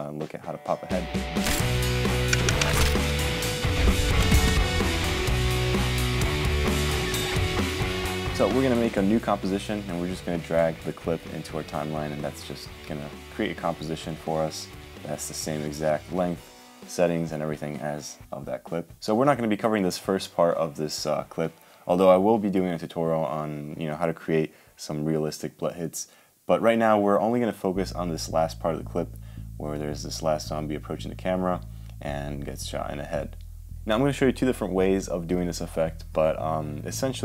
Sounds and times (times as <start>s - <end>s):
Speech: 0.0s - 1.1s, 8.3s - 37.2s
Music: 0.0s - 24.1s, 27.4s - 37.2s.